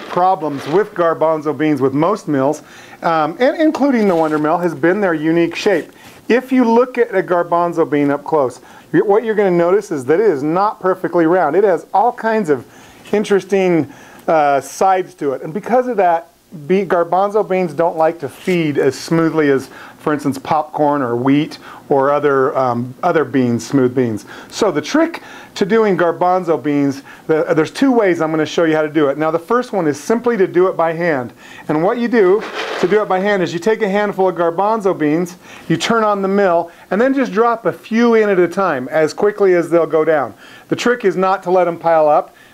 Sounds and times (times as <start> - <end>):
Speech: 0.0 - 42.4.